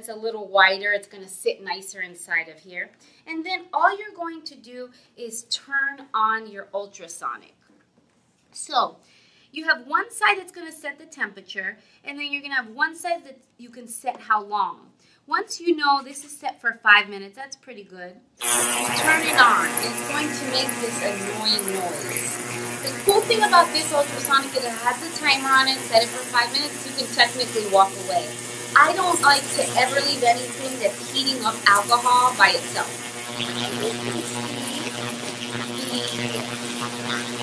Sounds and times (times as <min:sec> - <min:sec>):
Speech: 0:00.0 - 0:07.6, 0:08.6 - 0:09.0, 0:09.6 - 0:33.0, 0:33.6 - 0:37.4.